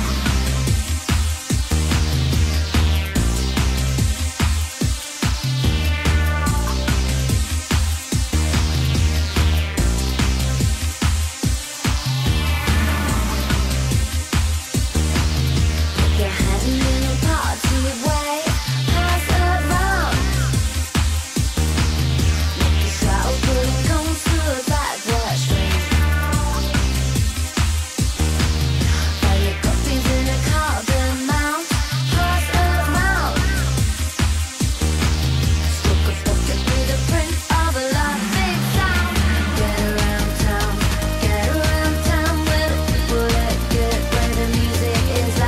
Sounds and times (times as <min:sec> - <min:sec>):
Music: 0:00.0 - 0:45.4.